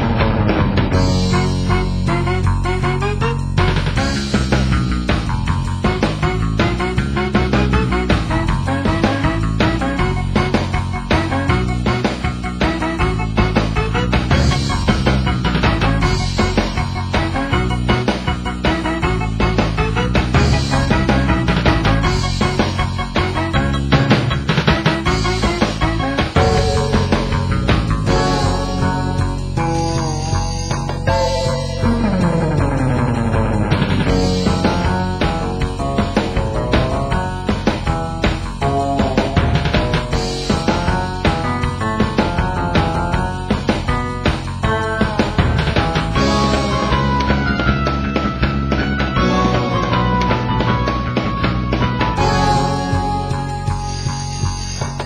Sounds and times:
Theme music: 0.0s - 10.4s, 11.1s - 43.3s, 46.0s - 55.0s.

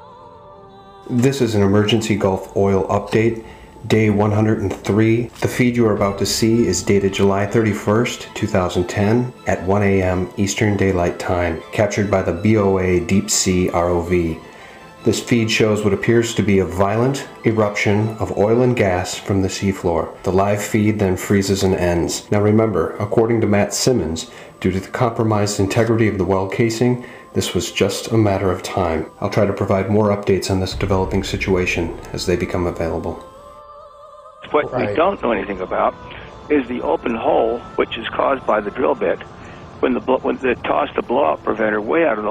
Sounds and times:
Music: 0.0s - 42.3s
Speech: 1.1s - 14.4s, 15.0s - 33.3s, 34.5s - 39.2s, 39.8s - 42.3s.

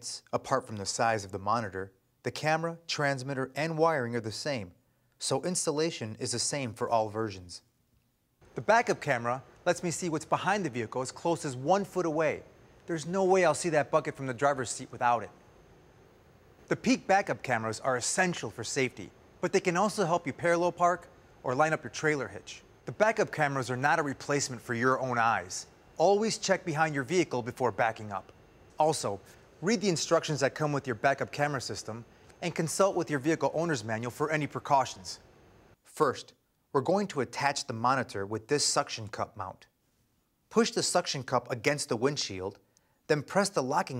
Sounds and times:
Speech: 0.0s - 7.7s, 8.5s - 15.4s, 16.7s - 35.2s, 35.8s - 39.7s, 40.5s - 43.9s.

